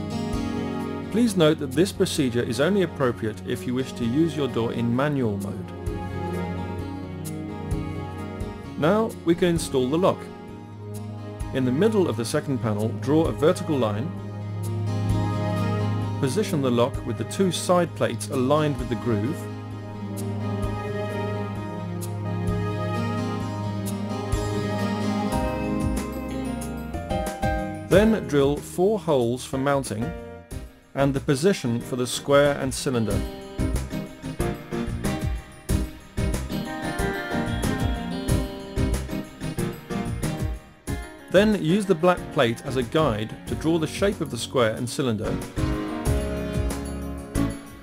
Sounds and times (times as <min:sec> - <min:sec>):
Music: 0:00.0 - 0:47.8
Speech: 0:01.2 - 0:05.7, 0:08.8 - 0:10.3, 0:11.5 - 0:14.1, 0:16.2 - 0:19.5, 0:27.9 - 0:30.2, 0:31.0 - 0:33.2, 0:41.3 - 0:45.4.